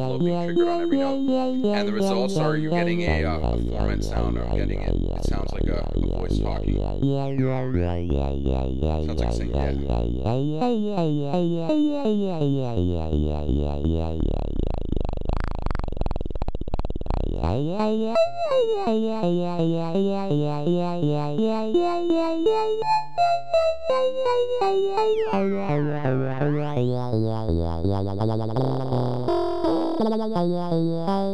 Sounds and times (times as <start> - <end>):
Speech: 0.0 - 6.8, 7.4 - 7.7, 9.0 - 9.9.